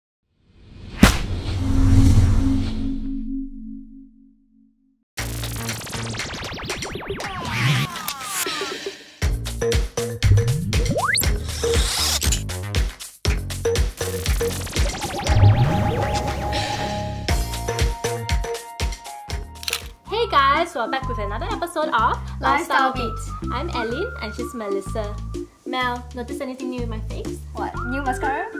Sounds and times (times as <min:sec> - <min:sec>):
Music: 0:05.2 - 0:28.5.